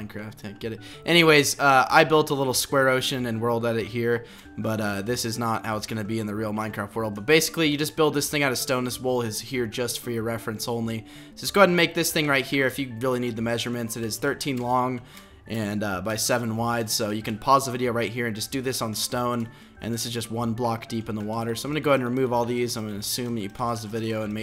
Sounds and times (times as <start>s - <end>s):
Music: 0.0s - 24.4s
Speech: 0.0s - 24.4s.